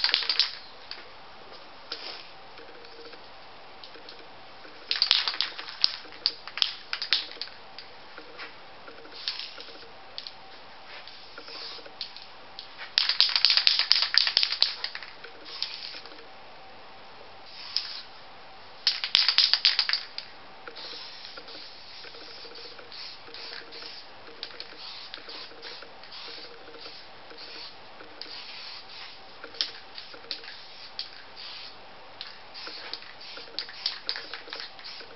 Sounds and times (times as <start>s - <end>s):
Spray: 2.0s - 2.3s, 9.2s - 9.7s, 10.9s - 11.9s, 15.5s - 16.0s, 17.5s - 18.1s, 20.8s - 31.8s, 32.6s - 35.1s.